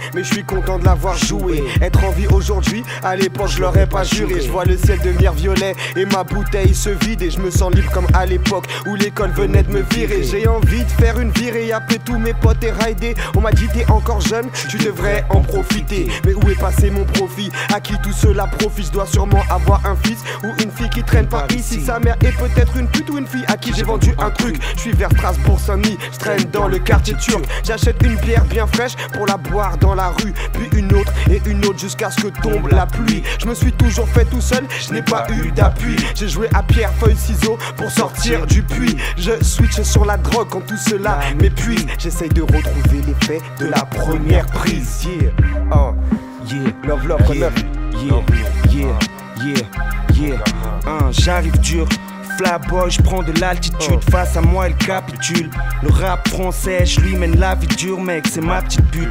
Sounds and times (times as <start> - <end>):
Music: 0.0 - 59.1.